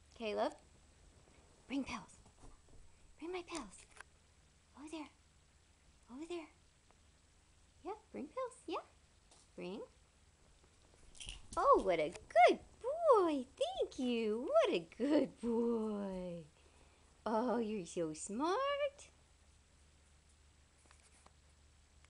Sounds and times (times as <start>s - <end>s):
Speech: 0.2s - 0.6s, 1.7s - 2.2s, 3.2s - 3.9s, 4.8s - 5.2s, 6.1s - 6.6s, 7.8s - 9.0s, 9.6s - 10.0s, 11.6s - 16.5s, 17.2s - 19.2s.